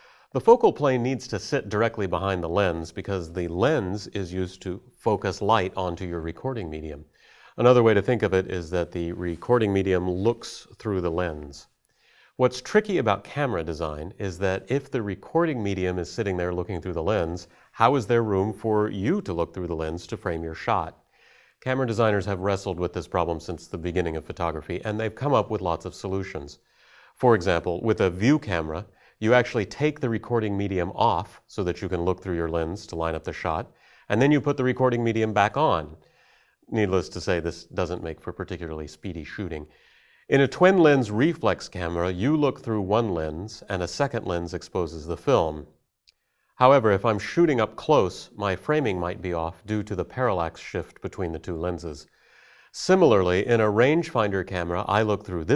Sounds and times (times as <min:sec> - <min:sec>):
Speech: 0:00.3 - 0:11.8, 0:12.4 - 0:21.0, 0:21.6 - 0:36.0, 0:36.6 - 0:45.8, 0:46.6 - 0:52.1, 0:52.7 - 0:55.5.